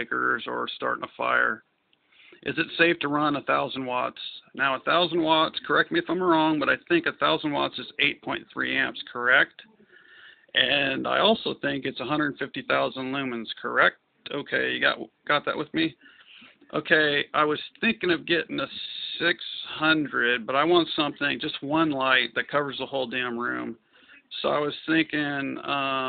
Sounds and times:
Speech: 0:00.0 - 0:01.6, 0:02.4 - 0:09.7, 0:10.6 - 0:26.0.

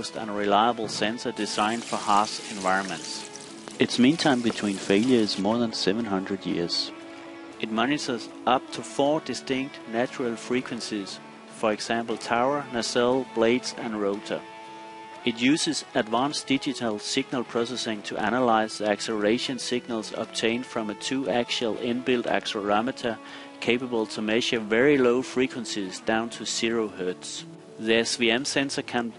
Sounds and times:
Speech: 0:00.0 - 0:07.0, 0:07.6 - 0:14.4, 0:15.3 - 0:29.1
Music: 0:00.0 - 0:29.1.

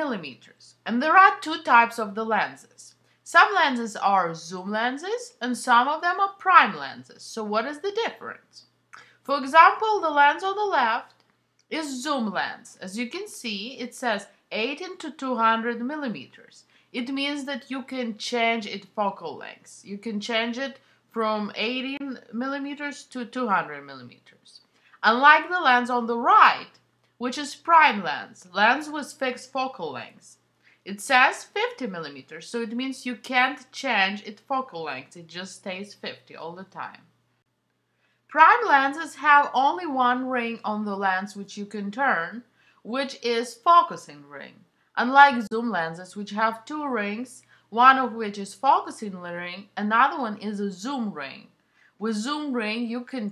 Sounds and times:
Speech: 0:00.0 - 0:37.1, 0:38.3 - 0:53.3.

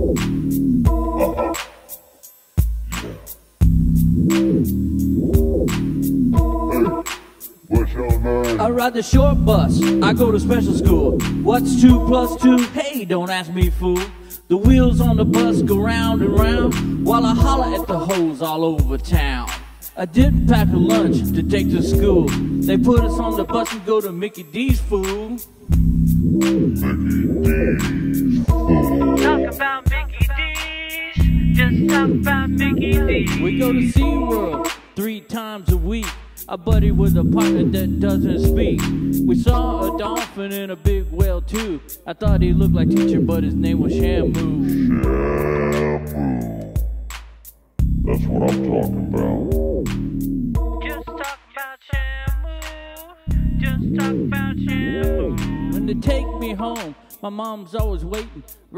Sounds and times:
Pop music: 0:00.9 - 0:02.0, 0:06.4 - 0:14.0, 0:14.8 - 0:25.3, 0:26.5 - 0:36.6, 0:39.4 - 0:41.8, 0:50.6 - 0:58.4.

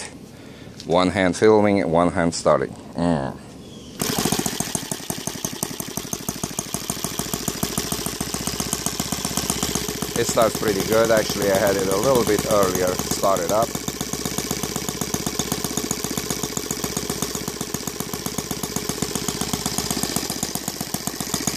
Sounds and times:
Outside, urban or manmade: 0:00.0 - 0:21.5
Speech: 0:00.9 - 0:03.5, 0:10.2 - 0:13.7
Engine: 0:03.7 - 0:21.5
Jackhammer: 0:04.0 - 0:21.5.

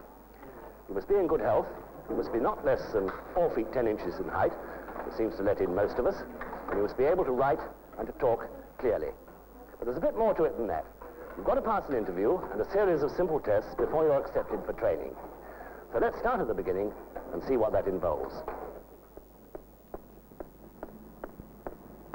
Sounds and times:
Speech: 0:00.9 - 0:15.2, 0:15.9 - 0:18.5.

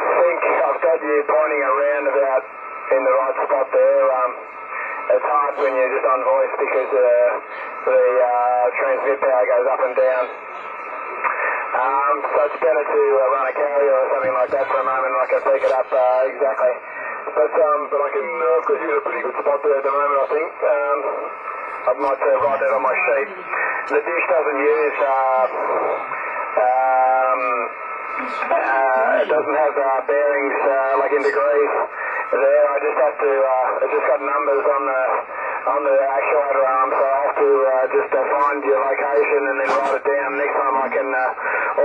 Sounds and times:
Radio: 0:00.0 - 0:41.8
Speech: 0:00.0 - 0:41.8.

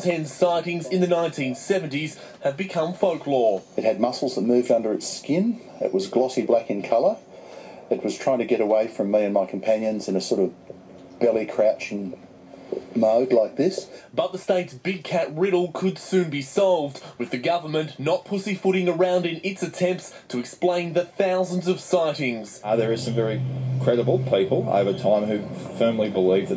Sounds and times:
Speech: 0:00.0 - 0:07.2, 0:07.9 - 0:10.6, 0:11.2 - 0:12.2, 0:13.0 - 0:26.5.

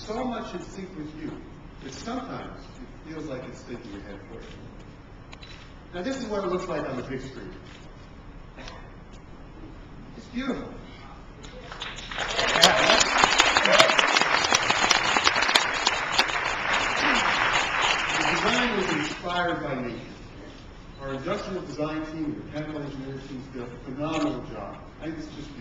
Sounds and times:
Applause: 0:11.6 - 0:19.2.

